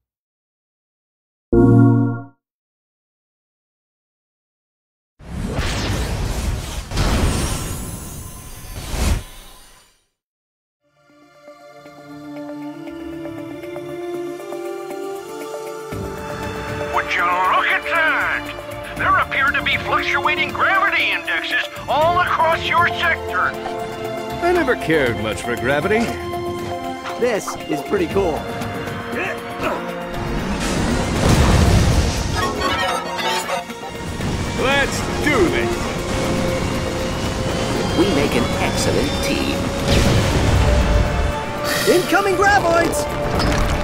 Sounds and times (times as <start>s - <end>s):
Music: 1.6s - 2.4s, 10.8s - 43.8s
Speech: 17.0s - 23.6s, 38.0s - 39.6s, 41.9s - 43.0s.